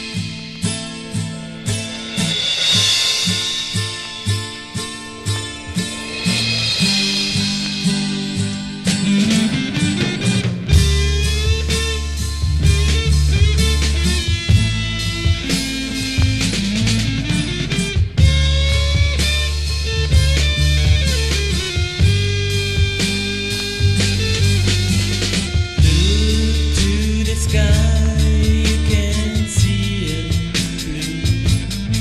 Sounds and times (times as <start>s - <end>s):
Psychedelic rock: 0.0s - 32.0s
Rimshot: 0.0s - 32.0s.